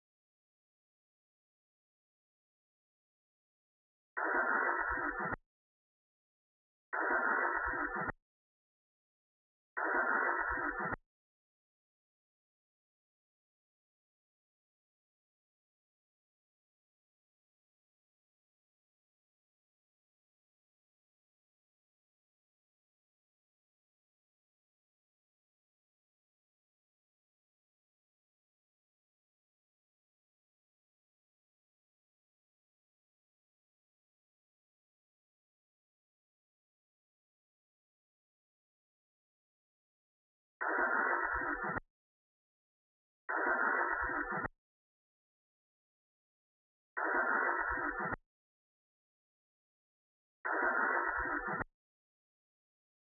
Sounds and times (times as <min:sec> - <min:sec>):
Silence: 0:43.3 - 0:44.6.